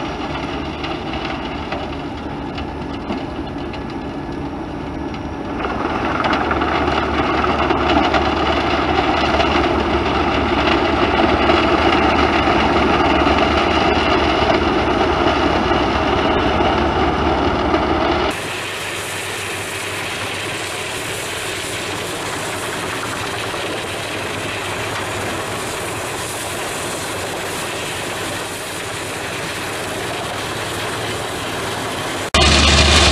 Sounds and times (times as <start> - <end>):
Heavy engine (low frequency): 0.0 - 33.1
Truck: 0.0 - 33.1.